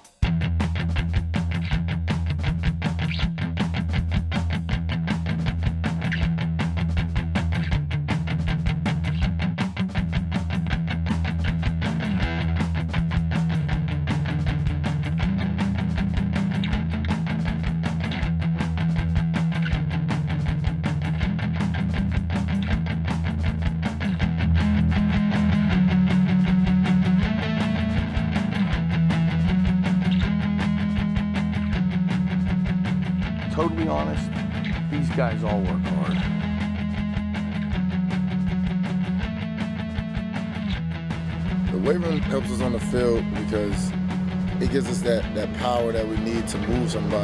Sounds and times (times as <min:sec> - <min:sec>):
Music: 0:00.0 - 0:47.2.